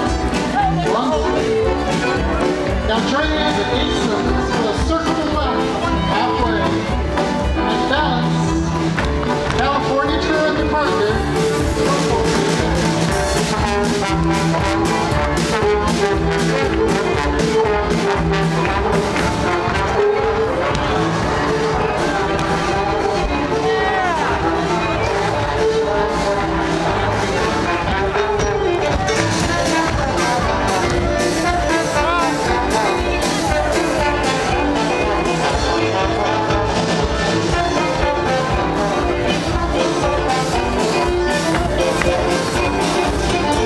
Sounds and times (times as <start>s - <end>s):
Music: 0.0s - 43.6s
Speech: 0.1s - 7.0s, 9.6s - 13.0s.